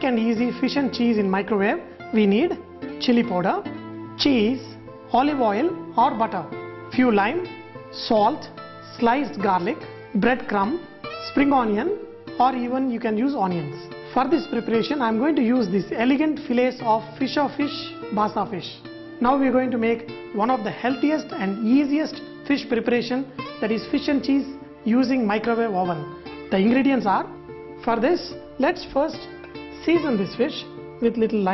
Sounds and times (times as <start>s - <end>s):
Speech: 0.0s - 29.2s, 29.8s - 31.5s
Music: 0.0s - 31.5s.